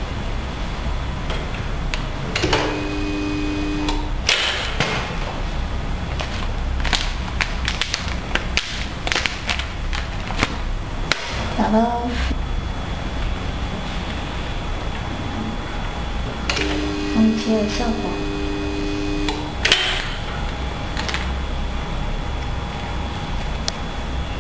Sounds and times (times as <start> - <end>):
Speech: 11.5 - 12.4, 17.2 - 18.3.